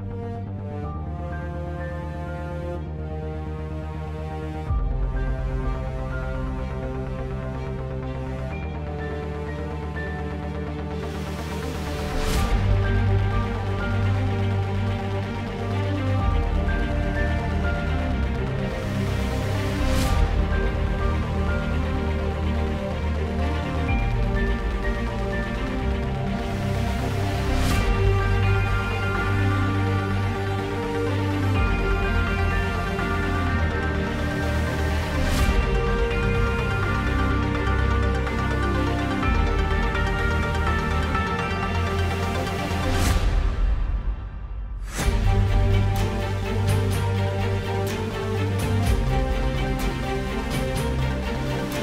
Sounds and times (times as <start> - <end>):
Music: 0.0 - 51.8.